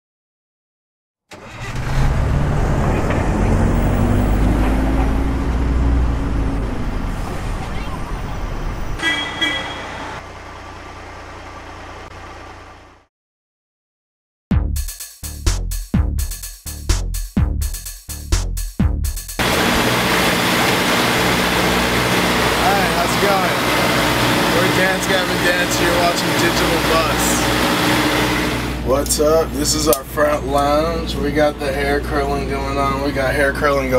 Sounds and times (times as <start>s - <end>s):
Bus: 1.3s - 13.1s, 19.4s - 33.9s.